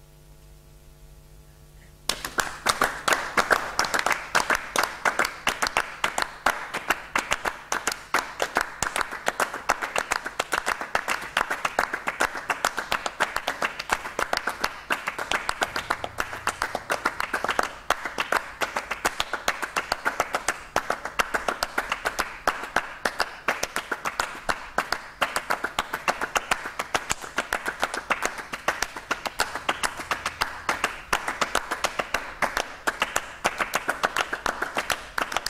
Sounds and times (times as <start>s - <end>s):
Clapping: 2.1s - 35.5s.